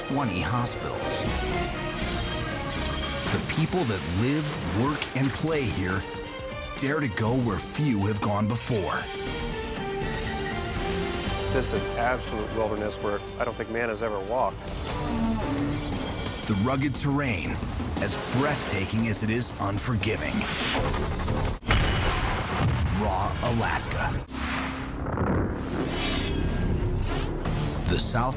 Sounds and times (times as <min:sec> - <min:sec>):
Speech: 0:00.0 - 0:01.2, 0:03.3 - 0:06.0, 0:06.8 - 0:09.1, 0:11.6 - 0:14.6, 0:16.5 - 0:20.5, 0:22.9 - 0:24.1, 0:27.8 - 0:28.3
Music: 0:00.0 - 0:21.9, 0:23.0 - 0:28.3.